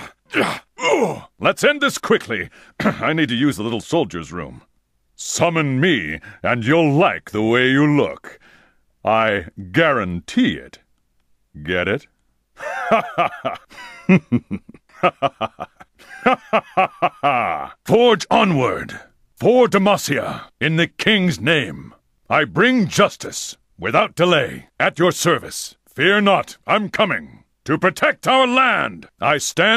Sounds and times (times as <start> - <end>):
Speech: 0.8 - 8.4, 9.0 - 10.9, 11.6 - 12.1, 17.3 - 29.7.